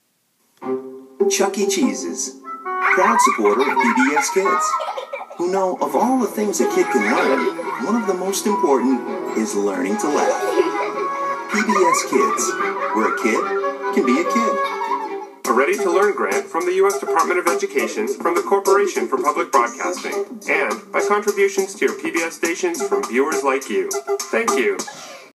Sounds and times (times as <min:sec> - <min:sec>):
Music: 0:00.6 - 0:04.7, 0:05.7 - 0:25.3
Speech: 0:01.3 - 0:04.8, 0:05.4 - 0:10.7, 0:11.5 - 0:14.7, 0:15.5 - 0:24.8.